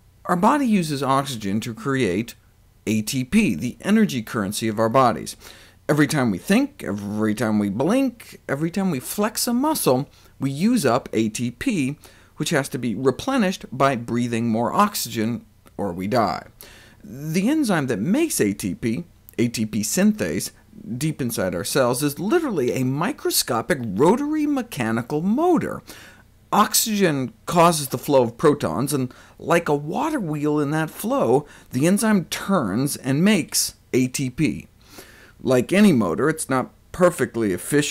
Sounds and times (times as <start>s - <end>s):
Speech: 0.3s - 25.9s, 26.5s - 34.7s, 35.4s - 37.9s.